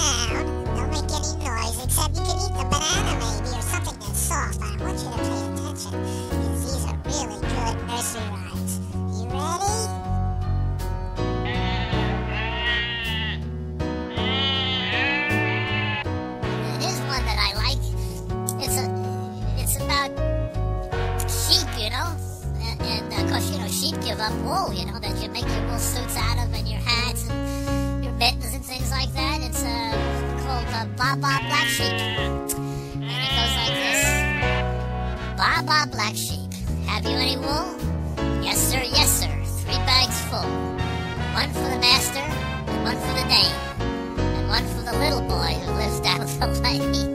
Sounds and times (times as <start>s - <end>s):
Speech: 0.0s - 10.0s, 16.6s - 20.1s, 21.2s - 27.4s, 28.0s - 32.2s, 33.2s - 34.2s, 35.4s - 37.8s, 38.4s - 40.5s, 41.3s - 43.6s, 44.4s - 47.1s
Music for children: 0.0s - 47.1s
Sheep: 11.4s - 13.4s, 14.1s - 16.1s, 31.3s - 32.3s, 33.0s - 34.6s.